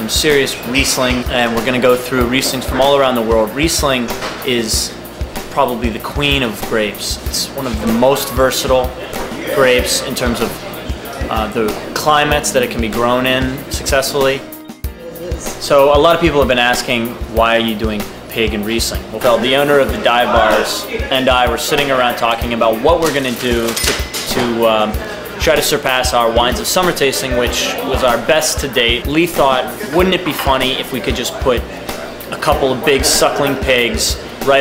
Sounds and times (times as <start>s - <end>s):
Speech: 0.0s - 14.5s, 15.1s - 34.6s
Music: 0.0s - 34.6s.